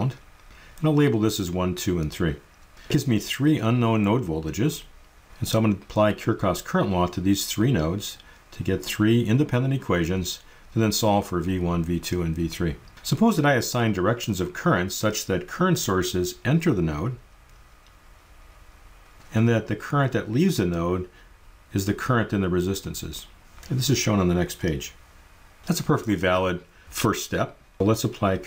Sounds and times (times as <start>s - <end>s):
Speech: 0.0s - 0.2s, 0.8s - 17.2s, 19.3s - 25.0s, 25.7s - 28.4s.